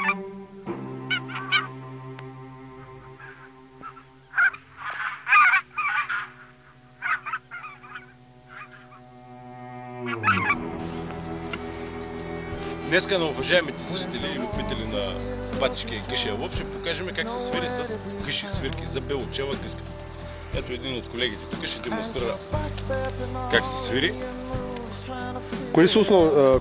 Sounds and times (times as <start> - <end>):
Music: 0.0 - 4.4, 7.0 - 26.6
Speech: 12.9 - 19.8, 20.6 - 22.4, 23.5 - 24.2, 25.7 - 26.6.